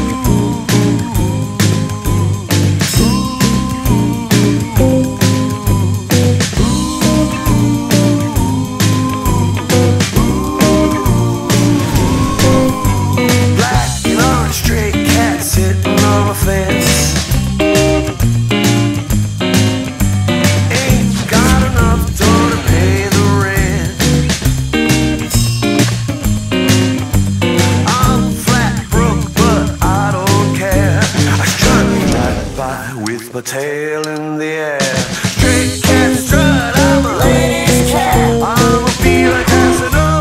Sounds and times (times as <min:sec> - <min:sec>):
Guitar: 0:00.0 - 0:40.2.